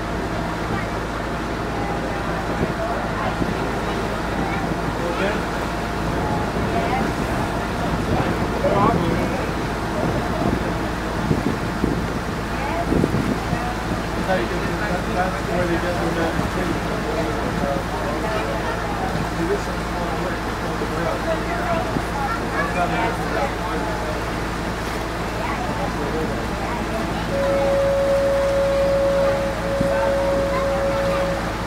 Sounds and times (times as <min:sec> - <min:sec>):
Motorboat, speedboat: 0:00.0 - 0:31.6
Speech: 0:00.6 - 0:11.2, 0:12.4 - 0:31.6.